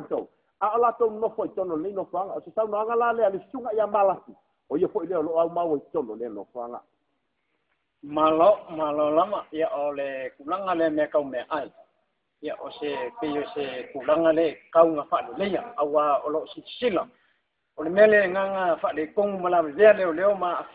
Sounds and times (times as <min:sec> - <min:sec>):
Speech: 0:00.0 - 0:06.9, 0:08.0 - 0:11.8, 0:12.4 - 0:17.1, 0:17.8 - 0:20.7.